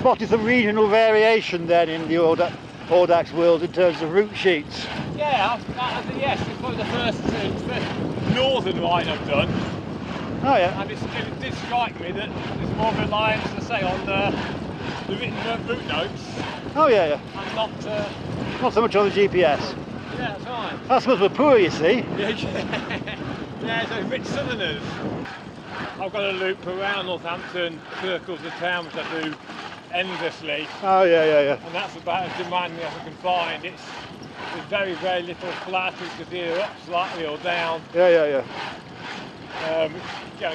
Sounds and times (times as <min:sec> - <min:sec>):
Speech: 0:00.0 - 0:09.5, 0:10.4 - 0:14.4, 0:15.1 - 0:22.7, 0:26.0 - 0:33.9, 0:34.6 - 0:38.5, 0:39.6 - 0:40.5
Bicycle: 0:00.0 - 0:40.5
Outside, rural or natural: 0:00.0 - 0:40.5.